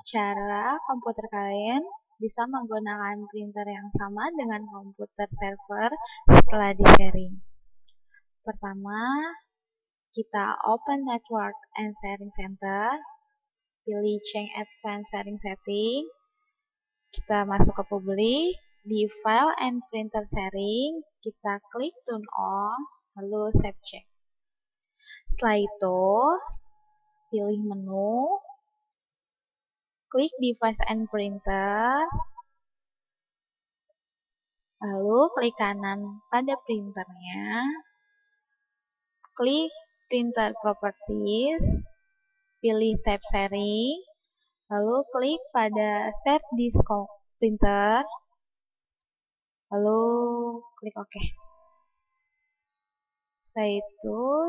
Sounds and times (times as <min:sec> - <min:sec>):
Speech: 0:00.0 - 0:07.4, 0:08.5 - 0:09.4, 0:10.2 - 0:13.1, 0:13.9 - 0:16.1, 0:17.2 - 0:24.1, 0:25.1 - 0:26.6, 0:27.4 - 0:28.4, 0:30.1 - 0:32.3, 0:34.8 - 0:37.8, 0:39.4 - 0:41.8, 0:42.6 - 0:44.1, 0:44.7 - 0:48.2, 0:49.7 - 0:51.4, 0:53.5 - 0:54.4.